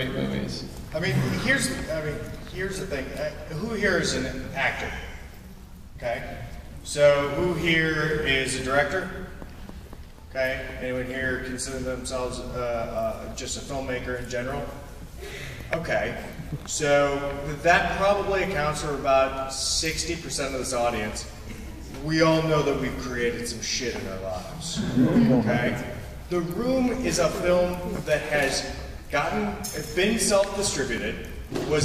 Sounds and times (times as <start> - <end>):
Speech: 0.0 - 5.2, 6.0 - 9.2, 10.3 - 14.8, 15.7 - 21.4, 22.0 - 31.8.